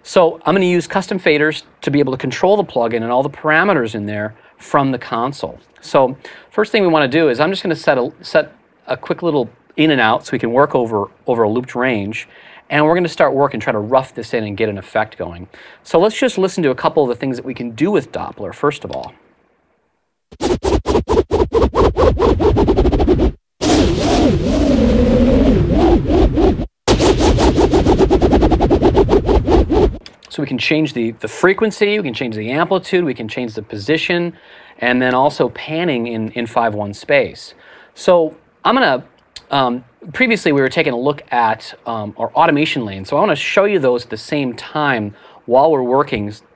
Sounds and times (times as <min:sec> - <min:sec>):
Sound effect: 0:20.3 - 0:29.9.